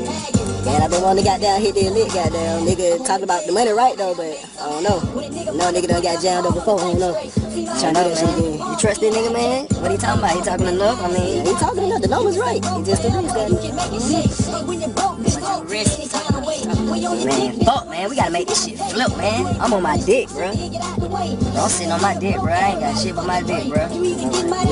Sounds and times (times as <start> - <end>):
Conversation: 0.0 - 24.7
Funk: 4.6 - 24.7.